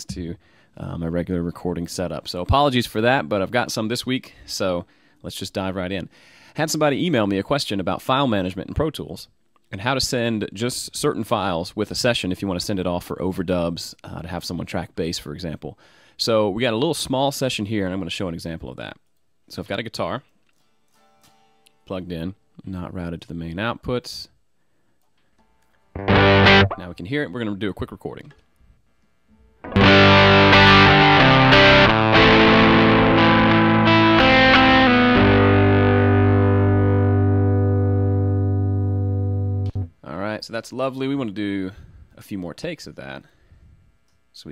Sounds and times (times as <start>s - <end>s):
Speech: 0.0s - 20.3s, 21.9s - 24.4s, 26.8s - 28.4s, 40.0s - 43.3s
Music: 26.0s - 26.8s, 29.6s - 39.9s.